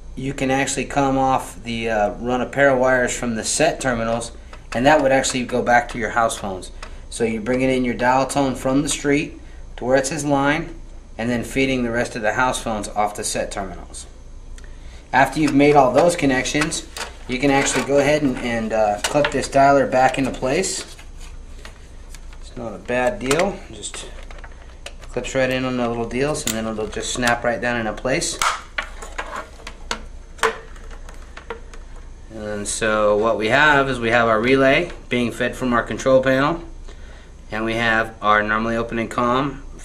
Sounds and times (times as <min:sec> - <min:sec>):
Speech: 0:00.2 - 0:14.2, 0:15.1 - 0:20.9, 0:22.4 - 0:24.2, 0:25.1 - 0:28.4, 0:32.3 - 0:36.7, 0:37.5 - 0:39.8.